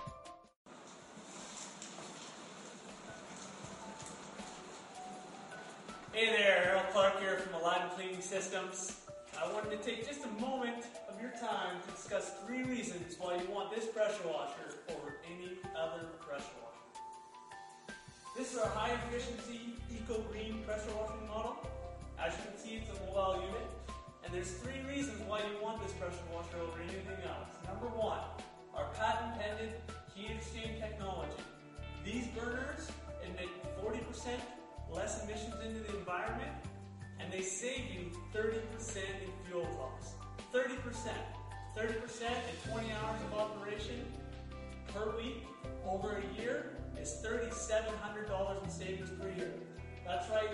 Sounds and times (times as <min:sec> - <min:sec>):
Music: 0:00.0 - 0:00.6, 0:01.4 - 0:50.5
Speech: 0:06.2 - 0:16.9, 0:18.4 - 0:36.6, 0:37.2 - 0:44.1, 0:44.9 - 0:50.5.